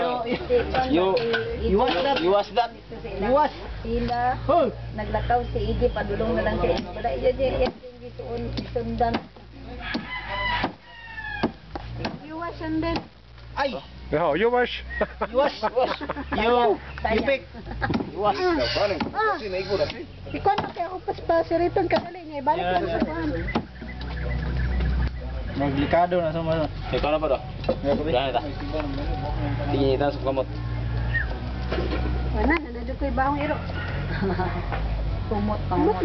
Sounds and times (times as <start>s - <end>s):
Music: 0.0s - 36.0s.